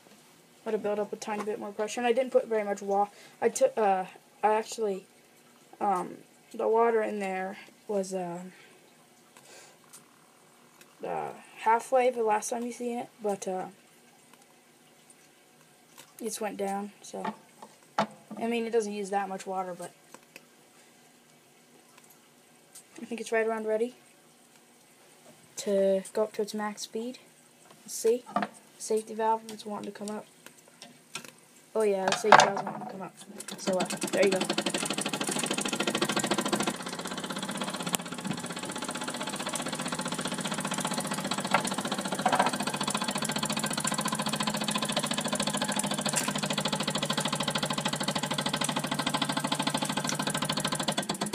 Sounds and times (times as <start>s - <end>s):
Speech: 0.7s - 5.1s, 5.8s - 8.6s, 11.0s - 13.8s, 16.2s - 17.4s, 18.4s - 20.0s, 23.0s - 24.0s, 25.6s - 27.2s, 27.9s - 30.3s, 31.8s - 34.5s
Engine: 33.6s - 51.3s.